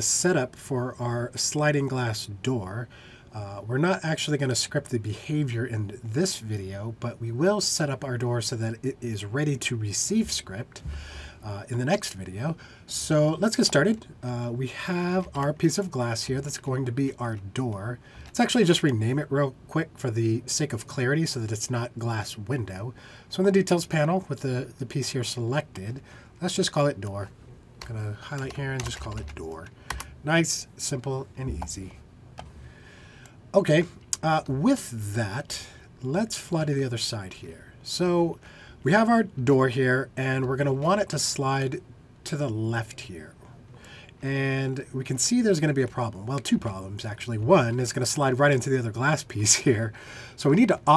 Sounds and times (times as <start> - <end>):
Speech: 0.0 - 32.0, 33.5 - 43.5, 44.2 - 50.9.